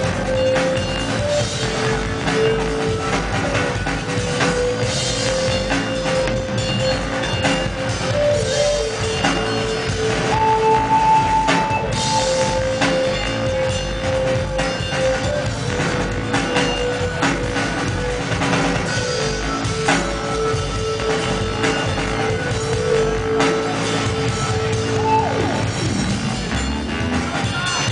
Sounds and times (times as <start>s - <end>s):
Drum and bass: 0.0s - 27.9s.